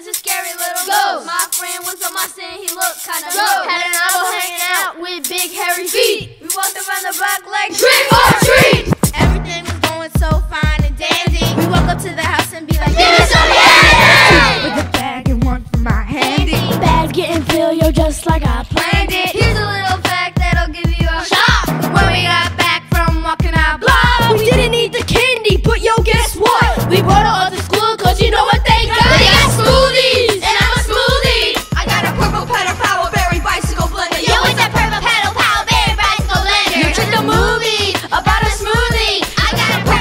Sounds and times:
Music: 0.0 - 40.0.

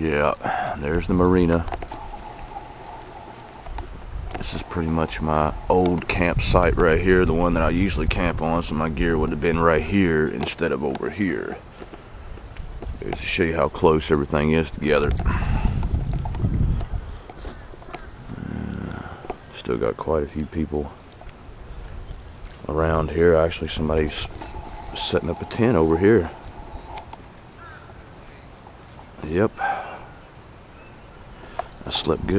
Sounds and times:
Speech: 0.0 - 1.7, 4.4 - 11.6, 13.0 - 15.3, 19.5 - 21.0, 22.7 - 24.4, 25.0 - 26.4, 29.2 - 29.7, 31.8 - 32.3
Wind noise (microphone): 3.7 - 10.1, 12.2 - 13.2, 14.6 - 17.6, 31.9 - 32.3.

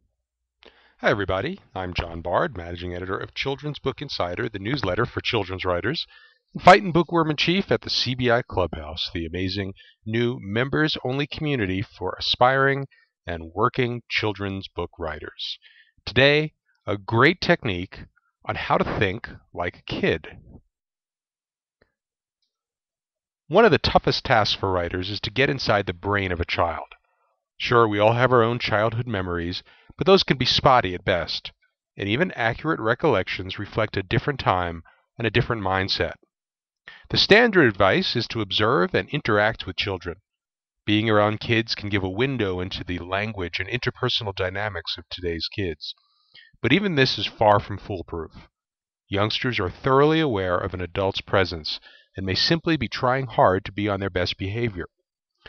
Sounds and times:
Speech: 1.0 - 20.6, 23.5 - 27.0, 27.6 - 36.2, 36.9 - 40.2, 40.9 - 48.5, 49.1 - 54.9.

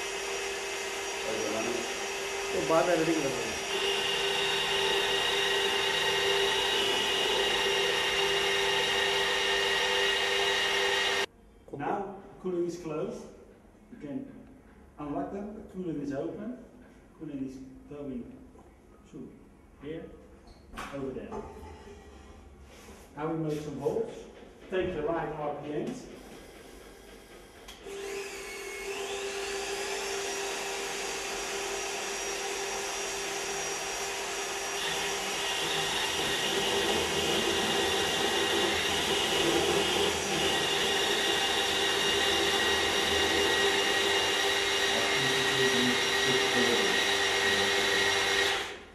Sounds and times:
Dental drill, dentist's drill: 0.0 - 11.3, 27.7 - 48.9
Speech: 2.6 - 3.6, 11.7 - 13.3, 14.0 - 14.4, 15.0 - 16.6, 17.2 - 18.3, 23.2 - 26.1, 44.9 - 47.0.

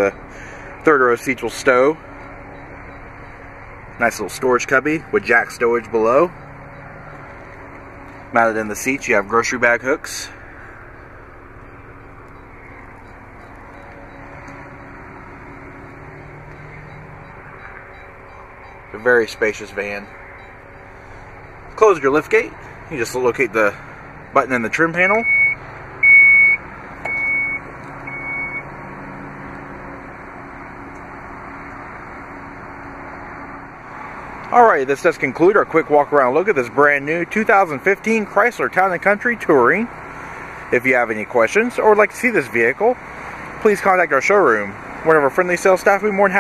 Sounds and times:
Vehicle: 0.0 - 46.4
Speech: 0.8 - 2.0, 4.0 - 6.4, 8.3 - 10.4, 18.9 - 20.1, 21.8 - 23.8, 24.4 - 25.3, 34.5 - 39.9, 40.7 - 43.0, 43.6 - 46.4.

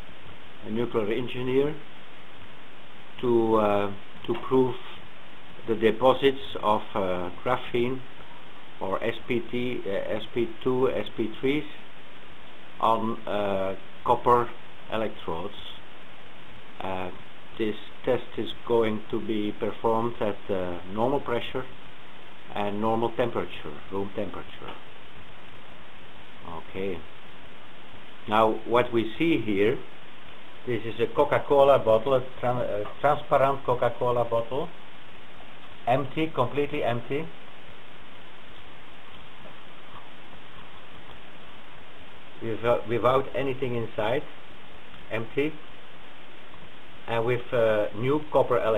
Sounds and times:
Inside, small room: 0.0 - 48.7
Speech: 0.6 - 1.9, 3.2 - 5.0, 5.6 - 8.1, 8.8 - 11.8, 12.8 - 15.8, 16.8 - 21.8, 22.5 - 24.9, 26.4 - 27.1, 28.3 - 29.9, 30.7 - 34.8, 35.9 - 37.4, 42.4 - 44.4, 45.1 - 45.6, 47.1 - 48.7.

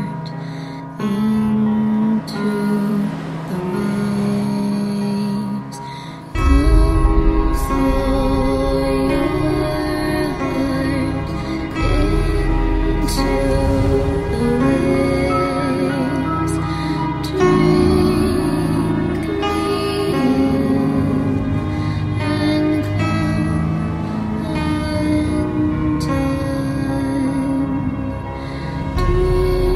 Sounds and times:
Music: 0.0 - 29.7.

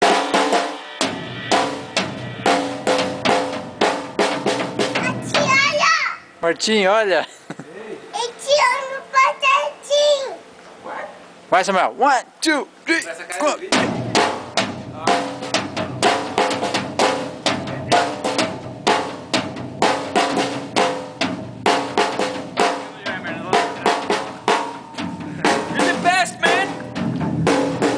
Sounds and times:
Drum: 0.0 - 6.1, 13.6 - 27.9
Drum kit: 0.0 - 6.1, 13.6 - 27.9
Child speech, kid speaking: 5.0 - 6.4, 8.1 - 11.2.

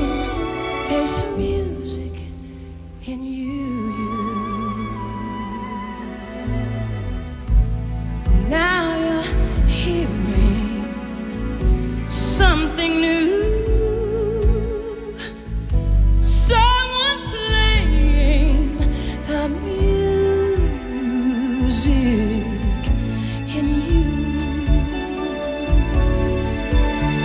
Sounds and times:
Music: 0.0 - 27.2.

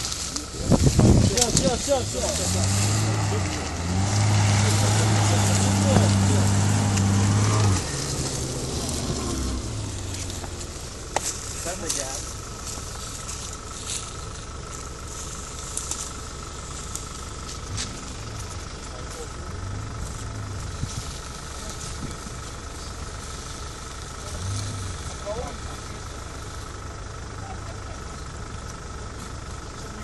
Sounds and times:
Car: 0.0 - 30.0
Outside, rural or natural: 0.0 - 30.0
Speech: 0.3 - 3.7, 4.6 - 6.5, 11.6 - 12.3, 25.1 - 26.3.

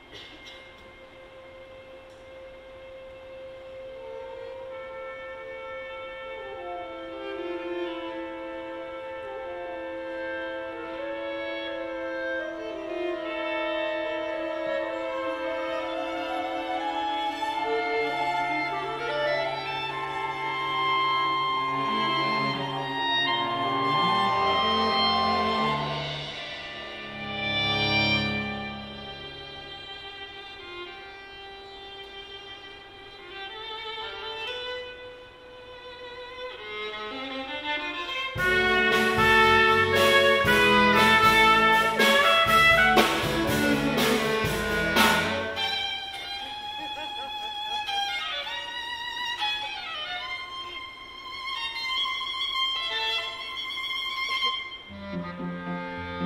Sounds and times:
Jazz: 4.0 - 30.4, 38.3 - 47.2.

